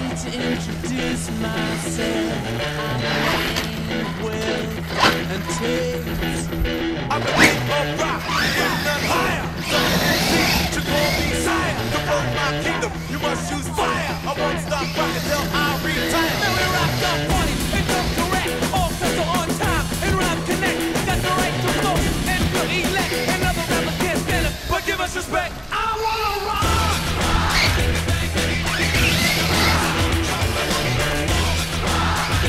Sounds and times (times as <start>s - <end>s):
Music: 0.0s - 25.5s, 26.6s - 32.4s.